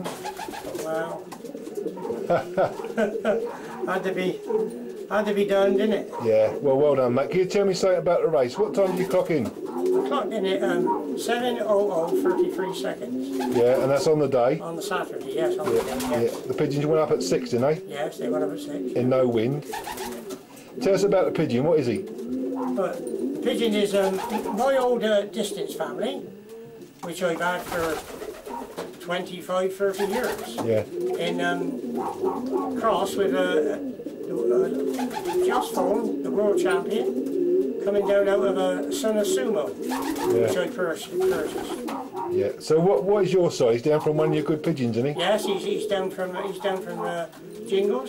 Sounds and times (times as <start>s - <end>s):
Coo: 0.0s - 6.6s, 8.5s - 14.0s, 19.7s - 26.8s, 30.0s - 42.5s, 45.1s - 48.0s
Speech: 5.1s - 19.6s, 22.8s - 26.2s, 27.0s - 28.0s, 29.0s - 31.7s, 32.8s - 33.8s, 35.4s - 37.1s, 37.8s - 48.0s.